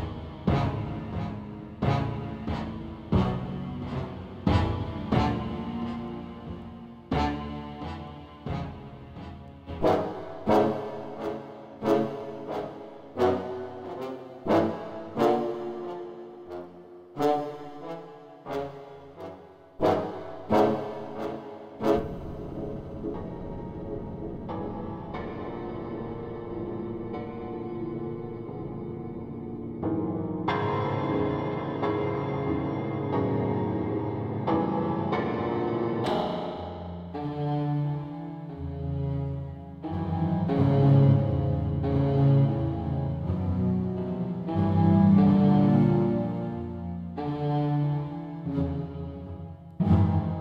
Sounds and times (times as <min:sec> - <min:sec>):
Soundtrack music: 0:00.0 - 0:50.4.